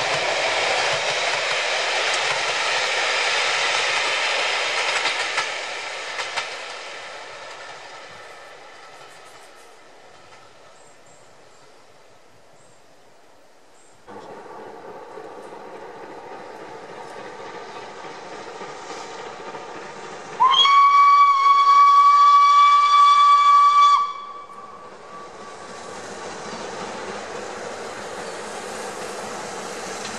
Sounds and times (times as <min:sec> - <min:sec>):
Hiss: 0:00.0 - 0:13.0, 0:13.6 - 0:30.1
Steam whistle: 0:20.4 - 0:25.4.